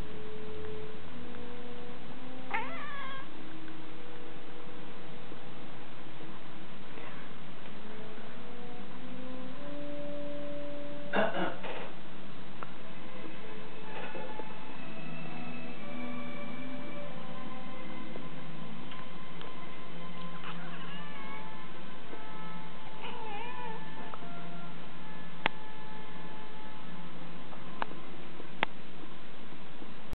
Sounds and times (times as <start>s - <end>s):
Music: 0.0s - 30.1s
Meow: 2.5s - 3.3s, 20.4s - 21.5s, 23.0s - 24.2s.